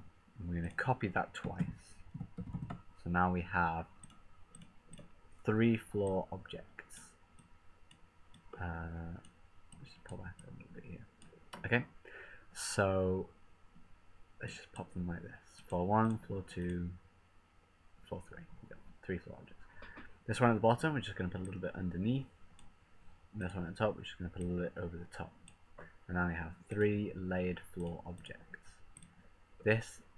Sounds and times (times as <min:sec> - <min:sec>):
Speech: 0:00.4 - 0:02.0, 0:03.0 - 0:03.9, 0:05.4 - 0:07.1, 0:08.6 - 0:09.2, 0:09.8 - 0:12.0, 0:12.6 - 0:13.3, 0:14.4 - 0:17.0, 0:18.1 - 0:19.6, 0:20.3 - 0:22.3, 0:23.4 - 0:25.4, 0:26.1 - 0:28.8, 0:29.6 - 0:30.1.